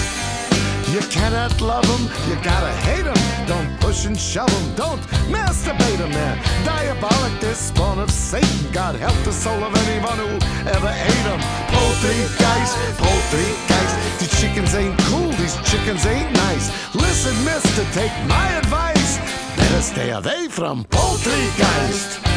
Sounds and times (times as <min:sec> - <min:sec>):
Exciting music: 0:00.0 - 0:20.0, 0:21.0 - 0:22.3.